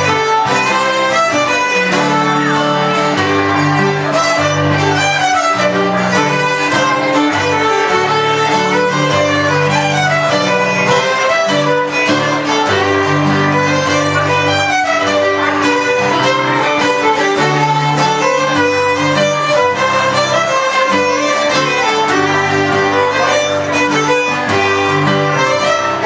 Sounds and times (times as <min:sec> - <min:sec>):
Violin, fiddle: 0:00.0 - 0:26.0.